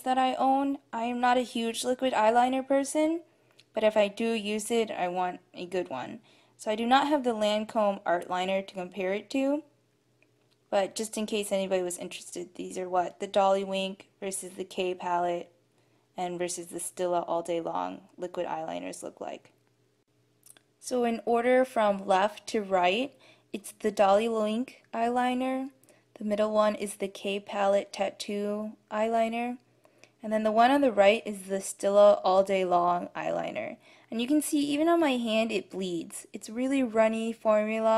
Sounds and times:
Speech: 0:00.0 - 0:09.7, 0:10.7 - 0:15.5, 0:16.2 - 0:19.5, 0:20.8 - 0:29.6, 0:30.2 - 0:37.9.

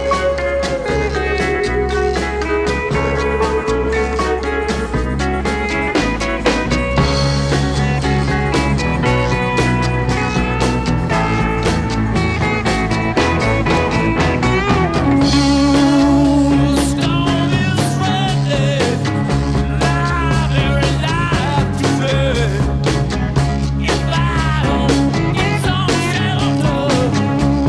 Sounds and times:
Music: 0:00.0 - 0:27.6.

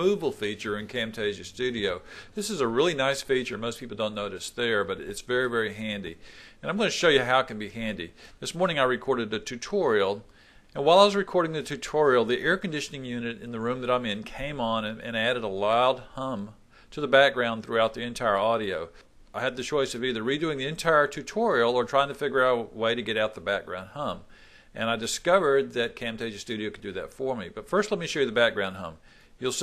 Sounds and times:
Speech: 0:00.0 - 0:29.6.

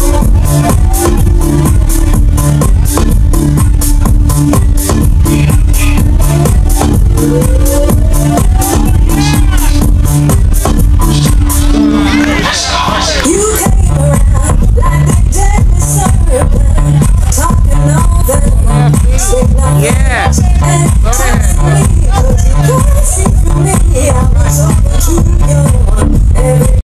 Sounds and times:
Music: 0:00.0 - 0:26.8
Speech: 0:18.6 - 0:22.8.

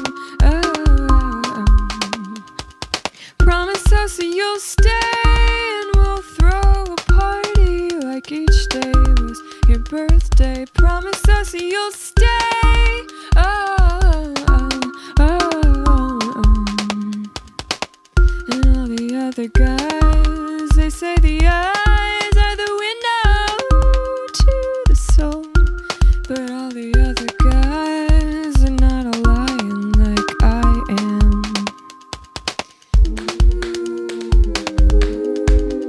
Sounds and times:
Music: 0:00.0 - 0:35.8.

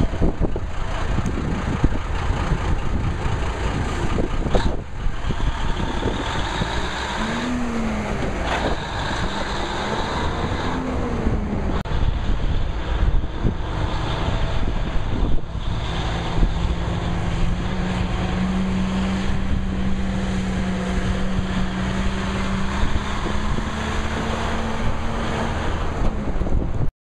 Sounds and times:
Truck: 0:00.0 - 0:26.9.

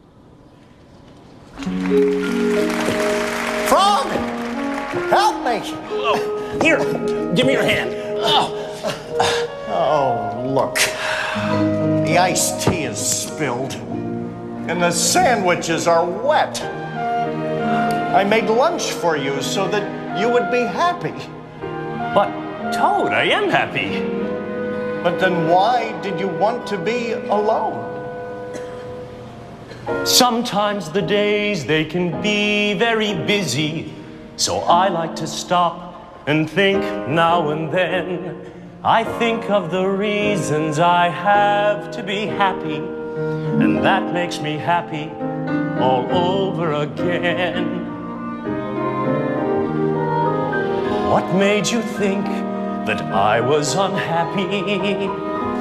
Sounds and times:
Music: 0:00.0 - 0:55.6.

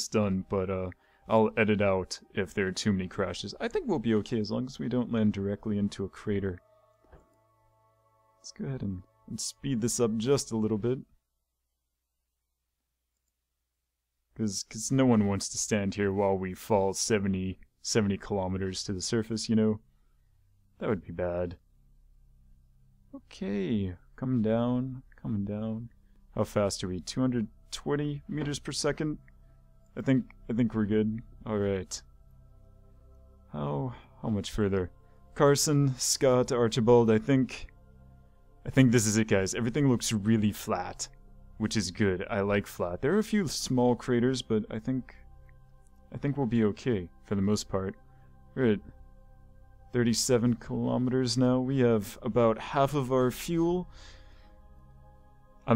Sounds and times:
Speech: 0:00.0 - 0:06.6, 0:08.4 - 0:11.1, 0:14.4 - 0:19.8, 0:20.8 - 0:21.6, 0:23.2 - 0:29.2, 0:30.0 - 0:32.0, 0:33.5 - 0:37.7, 0:38.7 - 0:45.2, 0:46.2 - 0:48.0, 0:48.6 - 0:48.9, 0:50.0 - 0:53.9.

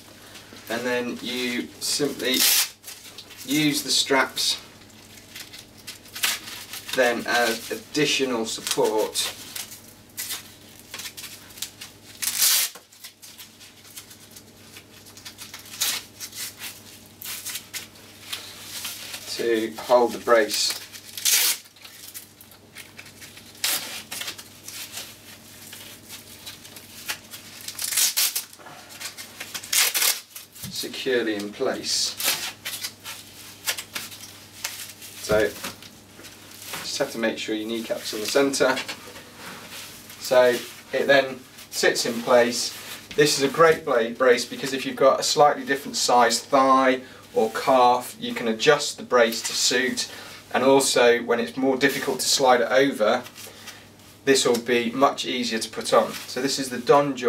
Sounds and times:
Inside, small room: 0:00.0 - 0:57.2
Speech: 0:00.7 - 0:02.6, 0:03.4 - 0:04.6, 0:06.9 - 0:09.4, 0:19.3 - 0:20.8, 0:30.7 - 0:32.2, 0:35.2 - 0:35.6, 0:36.8 - 0:38.9, 0:40.2 - 0:53.3, 0:54.2 - 0:57.2.

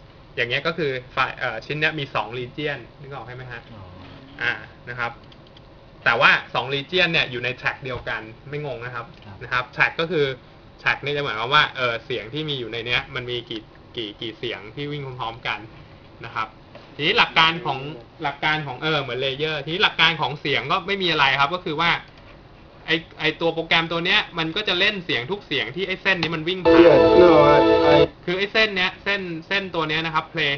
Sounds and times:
Speech: 0:00.4 - 0:05.2, 0:06.0 - 0:22.1, 0:22.8 - 0:27.6, 0:28.2 - 0:30.5
Music: 0:26.7 - 0:28.1.

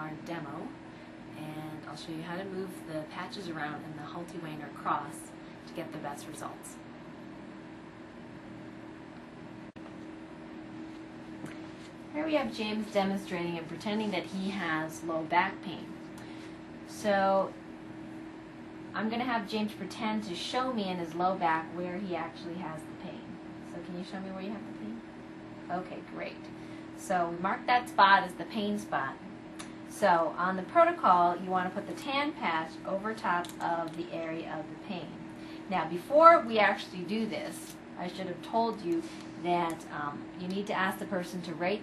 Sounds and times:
Speech: 0:00.0 - 0:06.8, 0:12.1 - 0:15.9, 0:16.9 - 0:17.6, 0:18.9 - 0:25.0, 0:25.7 - 0:29.3, 0:29.9 - 0:41.8.

